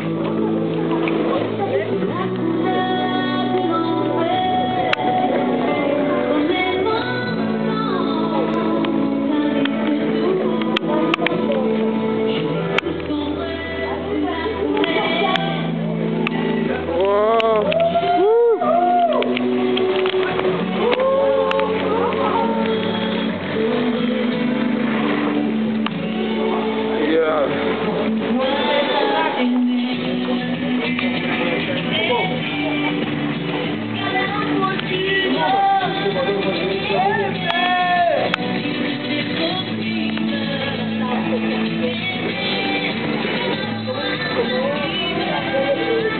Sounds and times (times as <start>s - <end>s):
Music: 0.0s - 46.1s.